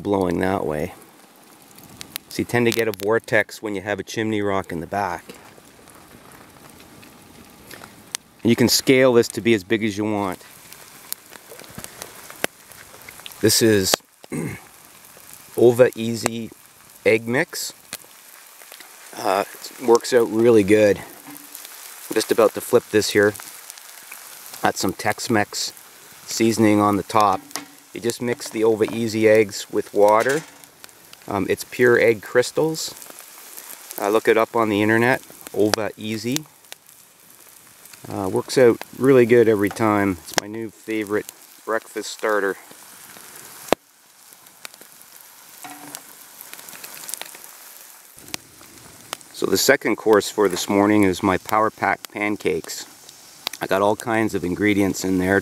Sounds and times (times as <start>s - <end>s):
Speech: 0.0s - 1.0s, 2.3s - 5.4s, 8.4s - 10.4s, 13.4s - 14.6s, 15.6s - 17.8s, 19.2s - 21.2s, 22.1s - 23.4s, 24.6s - 25.7s, 26.3s - 27.4s, 28.0s - 30.5s, 31.3s - 33.0s, 34.0s - 36.5s, 38.0s - 42.6s, 49.4s - 52.9s, 53.6s - 55.4s
Fire: 0.0s - 55.4s
Outside, rural or natural: 0.0s - 55.4s.